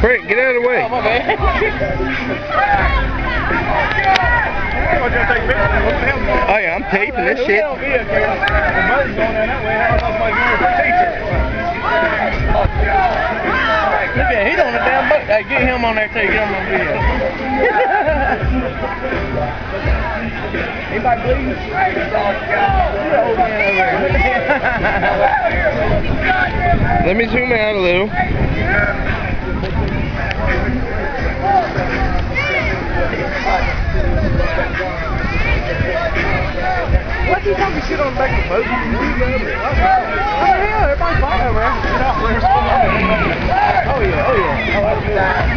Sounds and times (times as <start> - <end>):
Music: 0.0 - 45.5
Speech: 0.0 - 45.5.